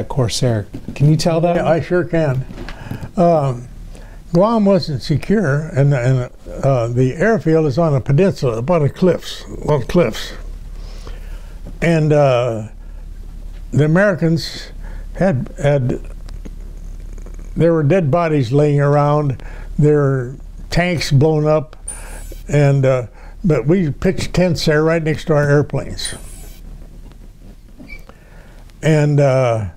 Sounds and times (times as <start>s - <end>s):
Speech: 0.0s - 2.5s, 3.2s - 3.7s, 4.3s - 10.5s, 11.8s - 12.8s, 13.7s - 16.1s, 17.6s - 21.8s, 22.5s - 26.2s, 28.8s - 29.7s.